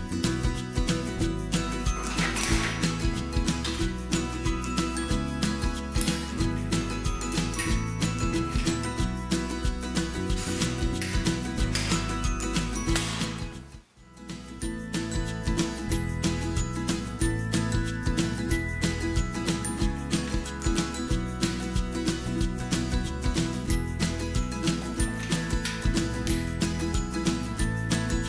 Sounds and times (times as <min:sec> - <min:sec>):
Music: 0:00.0 - 0:28.2.